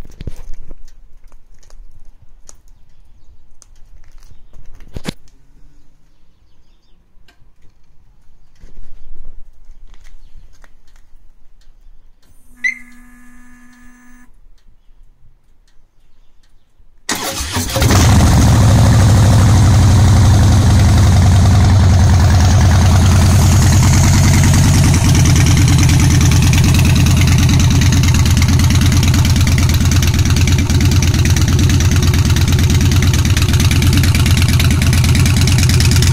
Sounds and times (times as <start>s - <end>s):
Outside, rural or natural: 0.0s - 36.1s
Motorcycle: 12.3s - 14.3s, 17.1s - 36.1s.